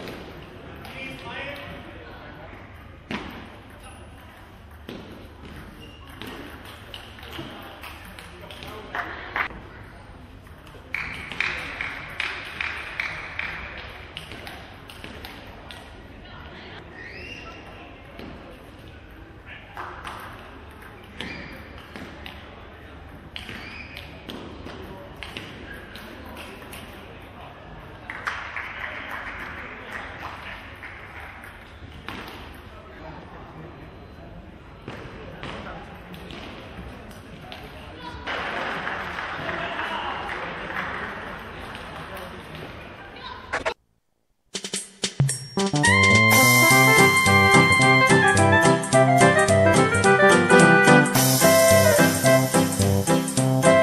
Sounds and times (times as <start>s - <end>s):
Speech: 0.6s - 4.6s, 7.0s - 12.3s, 32.6s - 43.6s.